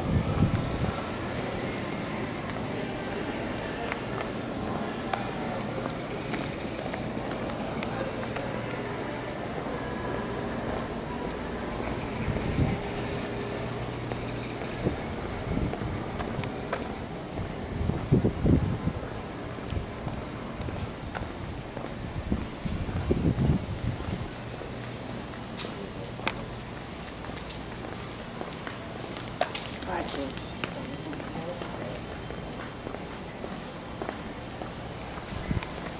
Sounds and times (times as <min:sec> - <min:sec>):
Walk, footsteps: 0:16.2 - 0:17.5, 0:24.8 - 0:31.9, 0:32.6 - 0:35.9.